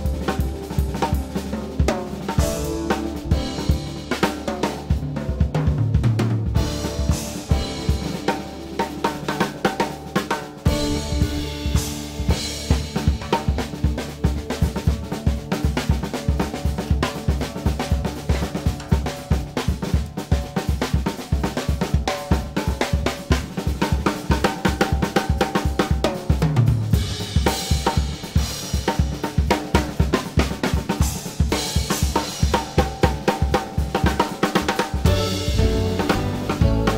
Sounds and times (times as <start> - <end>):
Jazz: 0.0 - 36.9
Snare drum: 0.0 - 36.9.